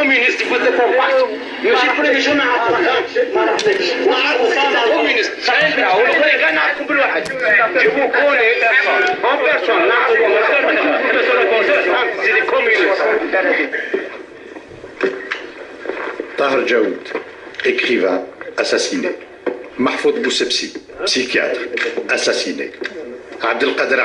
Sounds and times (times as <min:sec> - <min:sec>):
Speech: 0:00.0 - 0:13.9, 0:19.8 - 0:24.0.